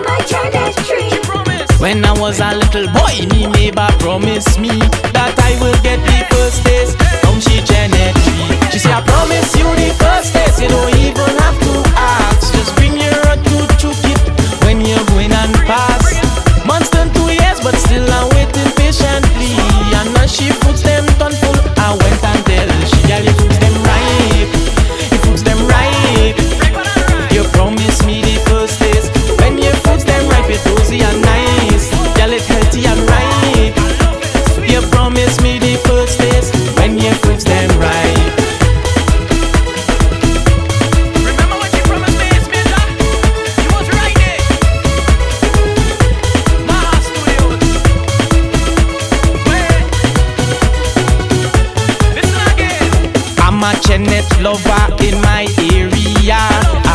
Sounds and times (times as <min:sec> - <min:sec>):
Rhythm and blues: 0:00.0 - 0:56.9.